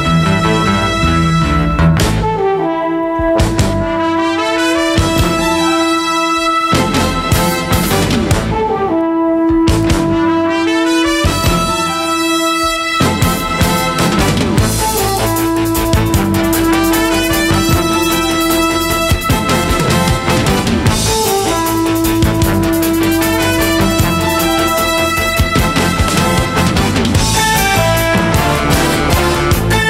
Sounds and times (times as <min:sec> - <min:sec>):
Saxophone: 0:00.0 - 0:29.8.